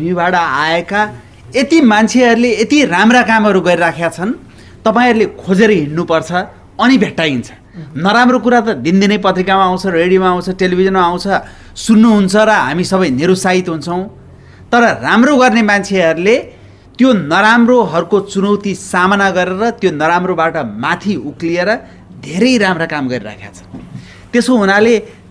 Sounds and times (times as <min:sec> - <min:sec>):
Male speech, man speaking: 0:00.0 - 0:23.7, 0:24.4 - 0:25.2.